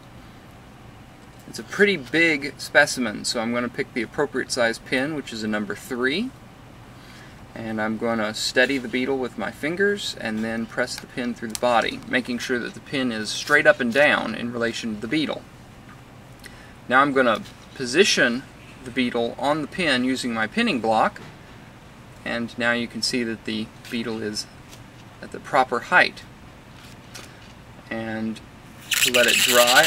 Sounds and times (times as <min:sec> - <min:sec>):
Speech: 0:01.5 - 0:06.4, 0:07.6 - 0:15.5, 0:16.9 - 0:21.2, 0:22.2 - 0:24.5, 0:25.2 - 0:26.3, 0:27.9 - 0:29.8.